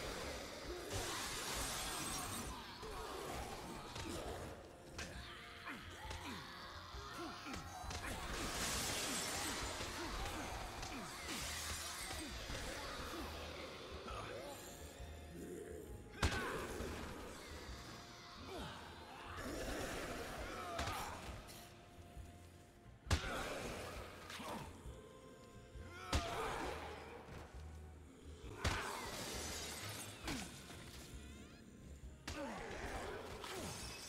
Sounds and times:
Smash, crash: 0:07.9 - 0:12.9.

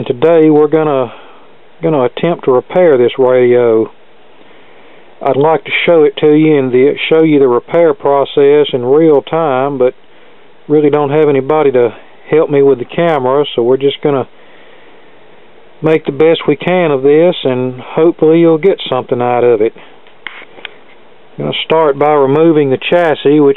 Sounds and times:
Speech: 0:00.0 - 0:01.2, 0:01.8 - 0:04.0, 0:05.2 - 0:10.0, 0:10.7 - 0:14.3, 0:15.8 - 0:19.8, 0:21.4 - 0:23.5.

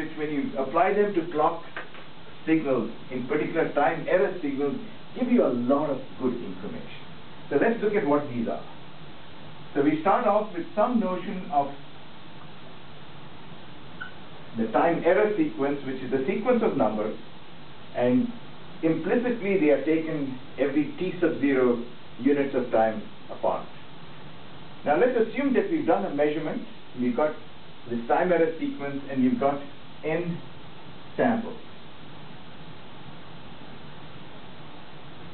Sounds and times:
Speech: 0:00.0 - 0:01.8, 0:02.4 - 0:08.7, 0:09.8 - 0:11.8, 0:14.6 - 0:17.2, 0:17.9 - 0:23.7, 0:24.8 - 0:30.4, 0:31.2 - 0:31.6.

